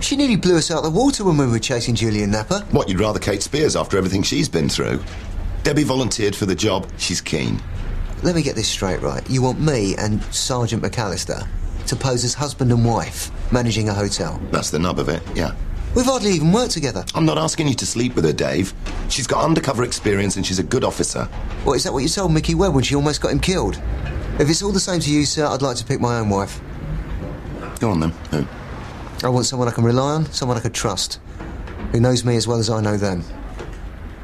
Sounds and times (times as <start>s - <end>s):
Speech: 0.0s - 7.6s, 8.2s - 23.8s, 29.2s - 31.2s, 31.9s - 33.4s.